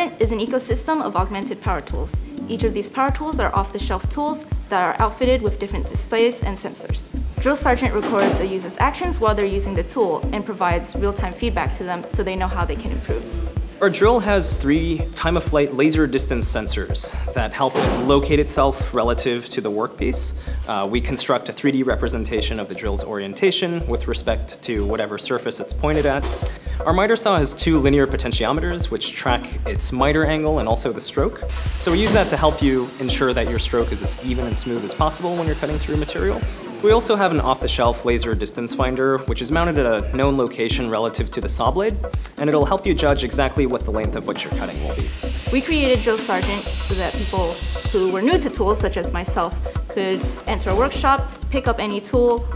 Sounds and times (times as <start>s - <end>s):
Music: 0.0s - 52.5s
Speech: 0.0s - 52.5s.